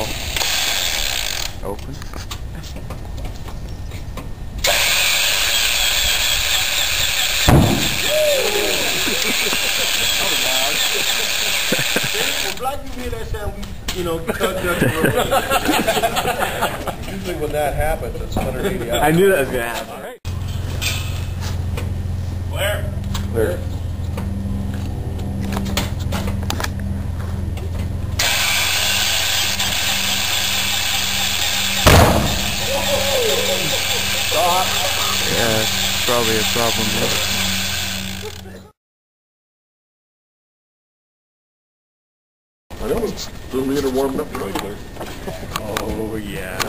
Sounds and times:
Speech: 0:34.4 - 0:37.3, 0:45.6 - 0:46.6.

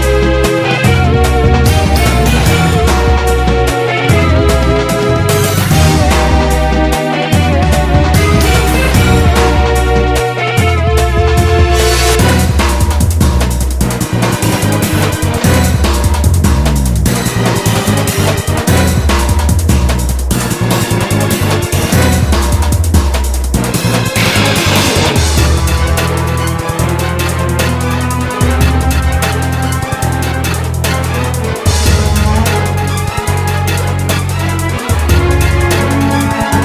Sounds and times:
Music: 0:00.0 - 0:36.6.

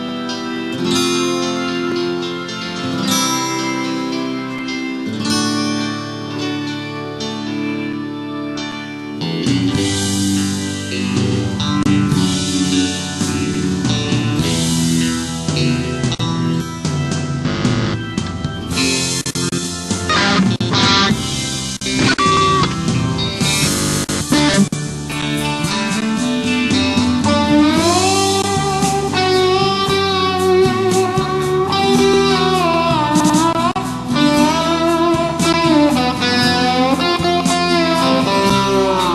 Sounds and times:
Electric guitar: 0:00.0 - 0:39.1.

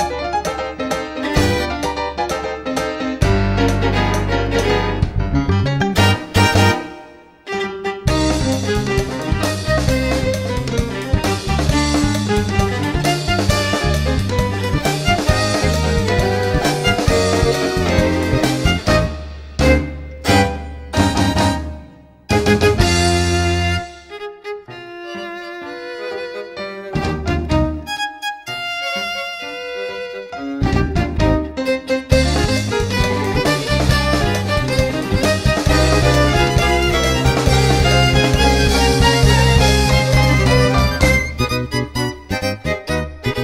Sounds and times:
Violin, fiddle: 0:07.4 - 0:20.5, 0:23.0 - 0:43.4.

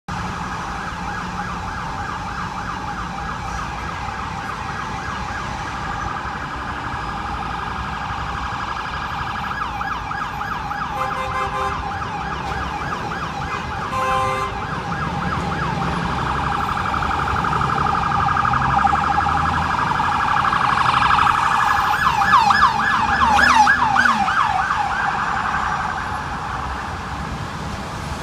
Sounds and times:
Ambulance (siren): 0:00.1 - 0:28.2.

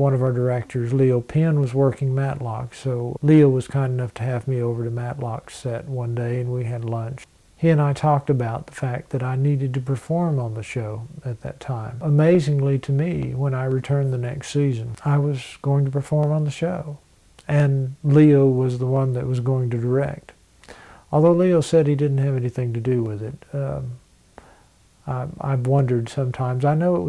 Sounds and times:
Speech: 0:00.0 - 0:20.4, 0:21.1 - 0:24.0, 0:25.0 - 0:27.0.

